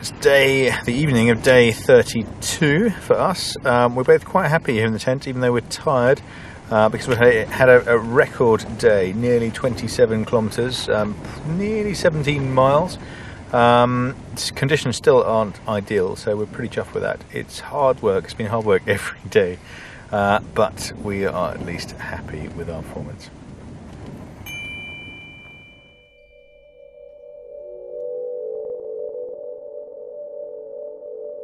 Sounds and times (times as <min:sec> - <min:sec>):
Speech: 0:00.0 - 0:23.4
Music: 0:26.2 - 0:31.4.